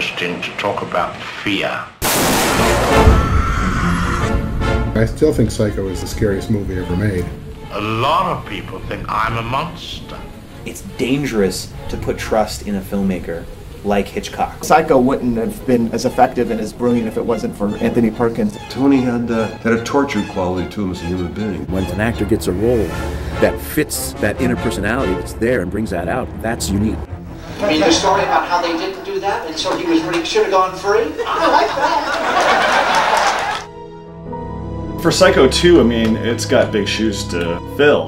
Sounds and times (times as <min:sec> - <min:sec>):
Speech: 0:00.0 - 0:02.0, 0:05.0 - 0:32.0, 0:35.0 - 0:38.0
Music: 0:02.3 - 0:38.0.